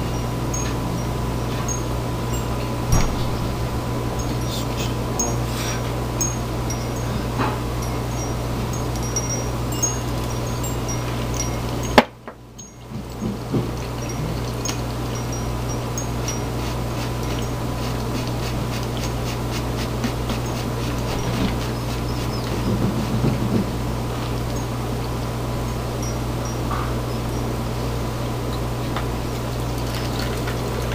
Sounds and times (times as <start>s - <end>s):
Engine: 0.0s - 30.9s.